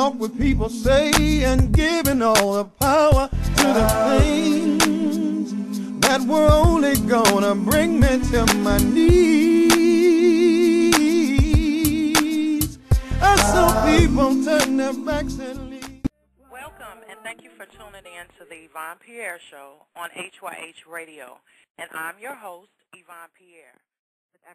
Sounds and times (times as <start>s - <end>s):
Music: 0.0s - 16.1s.